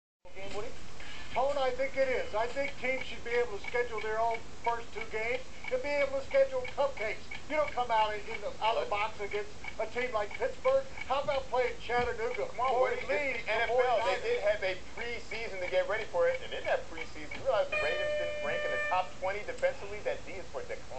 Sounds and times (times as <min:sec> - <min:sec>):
Speech: 0:00.3 - 0:00.8, 0:01.4 - 0:20.9.